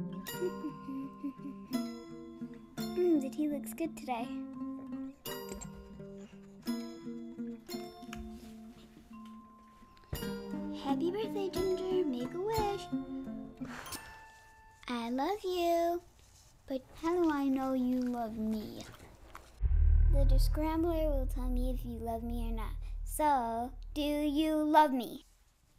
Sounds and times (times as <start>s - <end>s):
Speech: 3.0s - 4.4s, 10.8s - 12.9s, 14.9s - 16.0s, 16.7s - 18.9s, 20.2s - 25.3s.